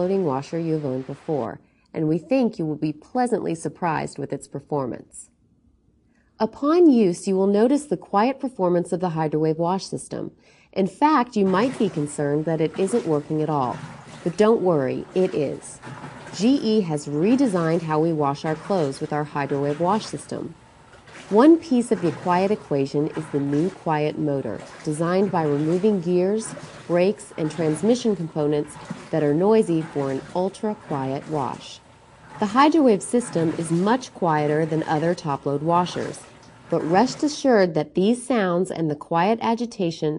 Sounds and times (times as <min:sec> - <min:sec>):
Speech: 0:00.0 - 0:05.3, 0:06.4 - 0:15.8, 0:16.4 - 0:20.6, 0:21.3 - 0:31.8, 0:32.4 - 0:40.1.